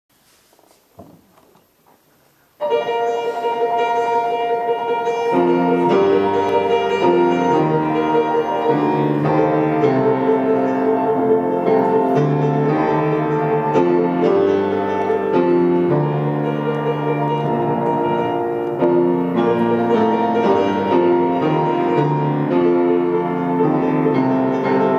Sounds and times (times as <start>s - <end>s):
Piano: 0.1s - 24.9s.